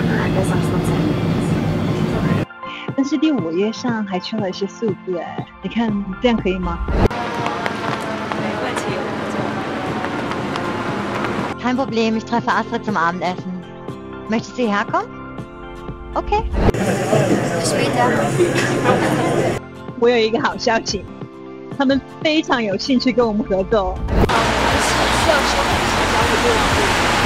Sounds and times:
Speech: 0.0 - 1.2, 2.9 - 7.8, 8.4 - 9.6, 11.6 - 13.6, 14.3 - 15.1, 16.2 - 21.1, 21.8 - 27.2
Music: 0.0 - 27.2.

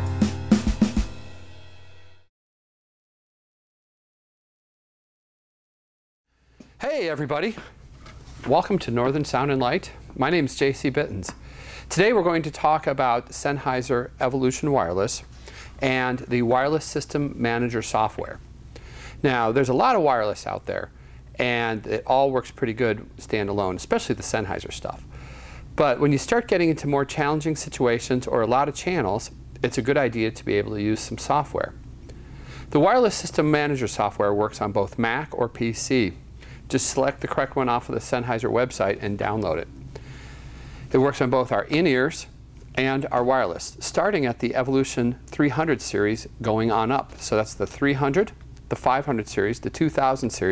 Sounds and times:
Speech: 6.8 - 7.8, 8.4 - 18.4, 19.2 - 25.0, 25.8 - 31.8, 32.7 - 39.7, 40.9 - 50.5.

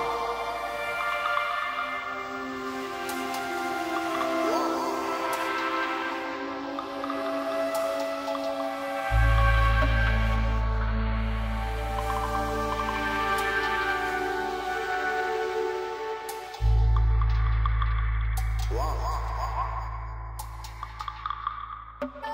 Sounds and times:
Electronic music: 0.0 - 22.3.

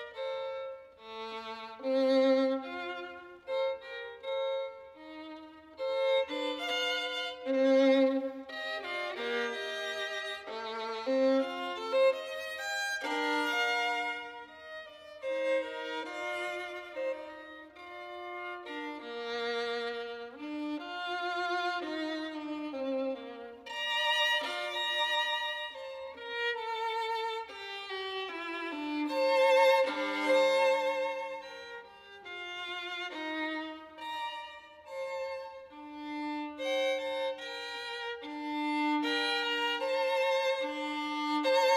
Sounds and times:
Violin, fiddle: 0.0 - 41.7.

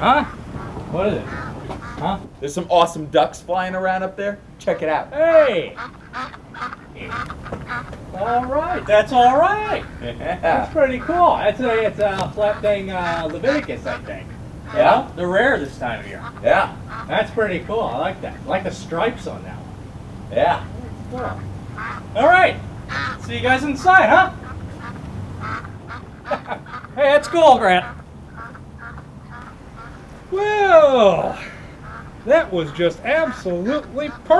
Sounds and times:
Quack: 0.0 - 2.3, 4.7 - 15.1, 16.0 - 18.5, 21.1 - 30.1, 31.4 - 34.4
Speech: 0.9 - 1.4, 2.0 - 5.8, 8.2 - 19.6, 22.2 - 22.6, 23.2 - 24.4, 27.0 - 27.9, 30.3 - 31.5, 32.3 - 34.4.

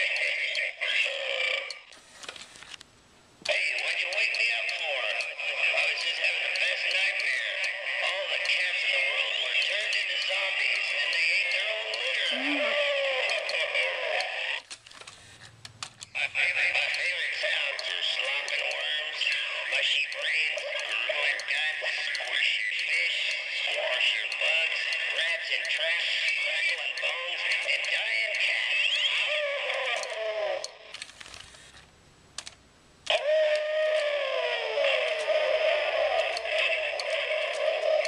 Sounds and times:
Speech: 0.0 - 1.7, 3.5 - 14.6, 16.2 - 30.7, 33.1 - 38.0.

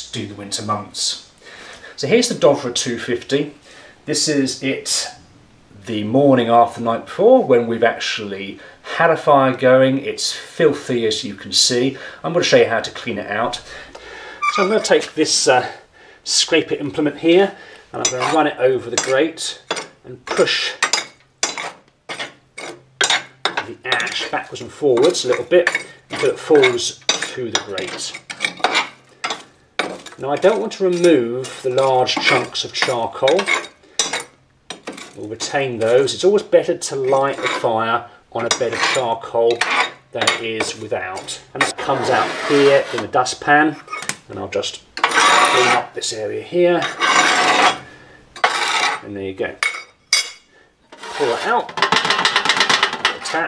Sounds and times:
Speech: 0.0 - 1.3, 2.0 - 5.2, 5.8 - 13.7, 14.5 - 20.8, 23.6 - 28.2, 30.2 - 33.7, 35.2 - 47.0, 49.0 - 49.6, 51.1 - 51.8, 53.1 - 53.4.

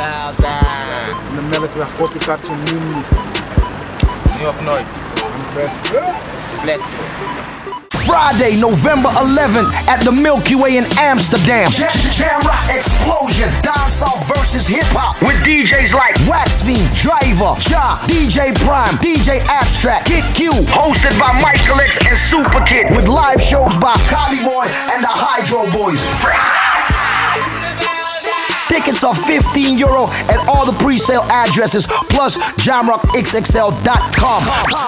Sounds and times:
Speech: 0.0 - 3.1, 4.3 - 7.1, 8.0 - 11.8, 20.6 - 24.2
Music: 0.0 - 34.8.

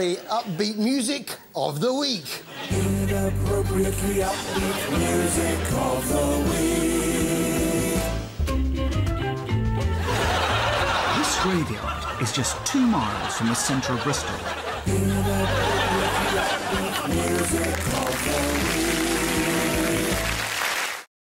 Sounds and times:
Speech: 0.0 - 2.4, 11.1 - 14.4
Music: 2.6 - 21.0.

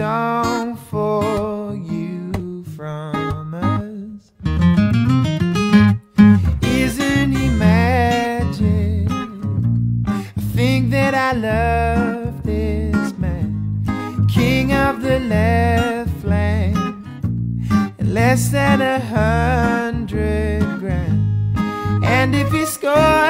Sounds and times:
Music: 0.0 - 23.3.

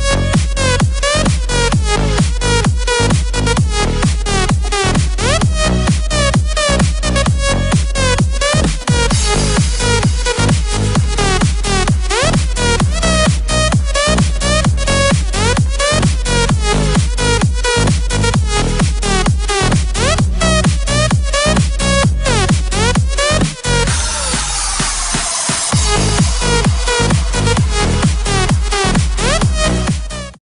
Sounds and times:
Electronic dance music: 0.0 - 30.4.

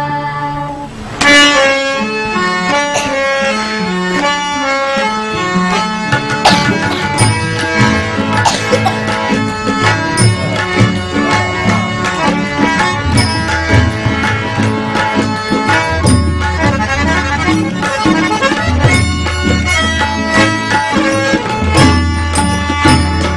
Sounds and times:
Music: 0.0 - 23.3.

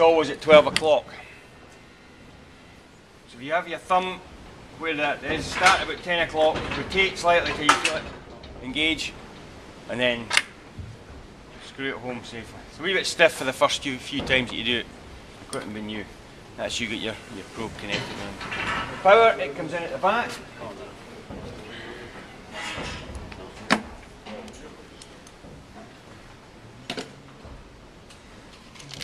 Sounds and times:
Speech: 0.0 - 1.1, 3.3 - 4.2, 4.8 - 9.2, 9.9 - 10.4, 11.6 - 14.9, 15.5 - 18.4, 19.0 - 22.2.

